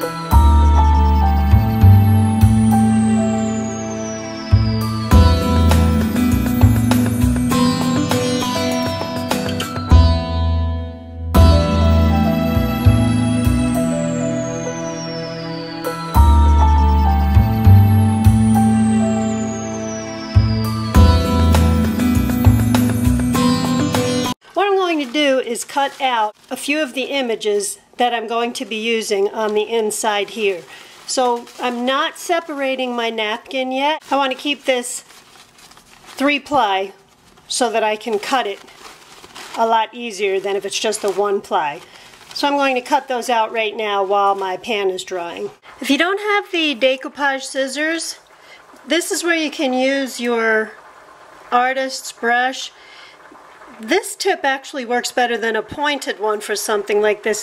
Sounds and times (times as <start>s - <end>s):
New-age music: 0.0s - 24.4s
Speech: 24.6s - 35.1s, 36.2s - 38.6s, 39.6s - 48.2s, 48.9s - 50.8s, 51.5s - 52.8s, 53.7s - 57.4s.